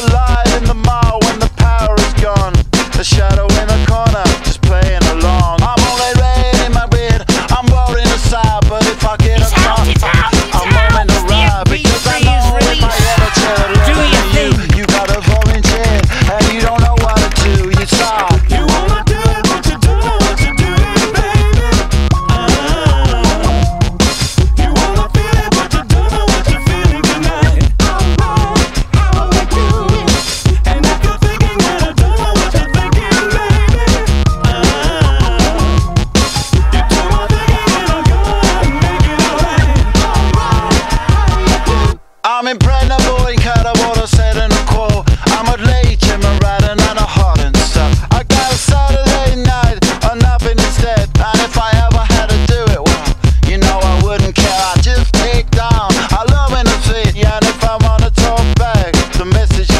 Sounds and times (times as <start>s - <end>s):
Music: 0.0s - 59.7s.